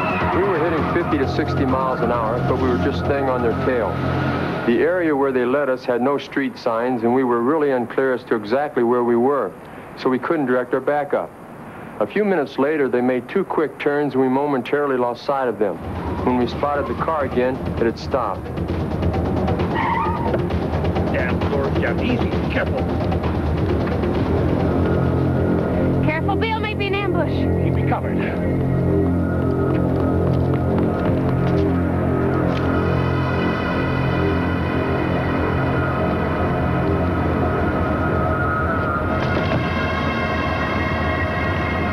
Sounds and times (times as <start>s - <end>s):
Scary music: 0.0s - 5.5s, 15.8s - 41.9s.